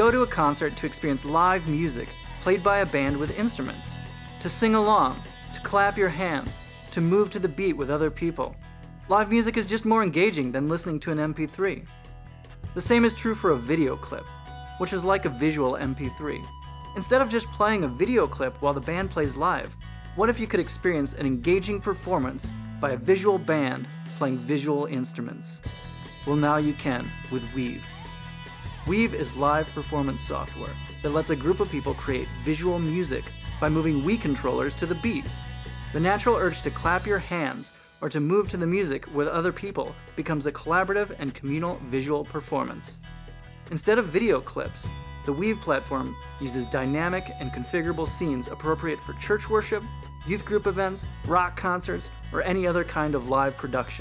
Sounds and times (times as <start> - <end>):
Speech: 0.0 - 11.9, 12.8 - 28.0, 28.8 - 35.3, 35.9 - 43.0, 43.7 - 54.0
Music: 0.0 - 54.0.